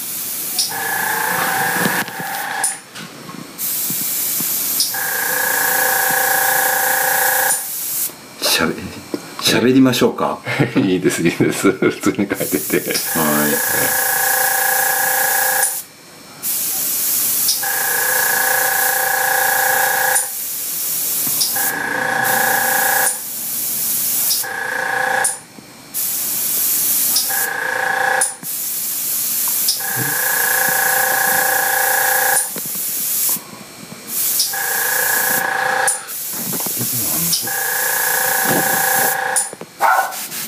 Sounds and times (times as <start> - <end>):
Speech: 8.4 - 14.0, 36.8 - 37.6.